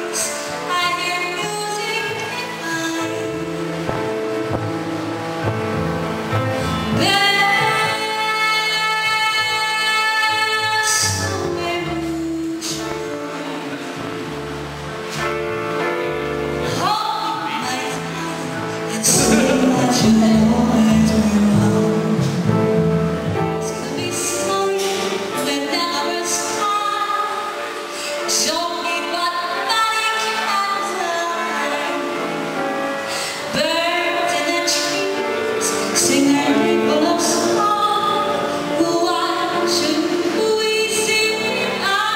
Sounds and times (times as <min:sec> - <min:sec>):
Female singing: 0:00.0 - 0:04.2, 0:07.0 - 0:13.7, 0:16.7 - 0:22.4, 0:23.6 - 0:27.6, 0:28.2 - 0:32.3, 0:33.4 - 0:42.1
Music: 0:00.0 - 0:42.1
Speech: 0:16.9 - 0:20.4.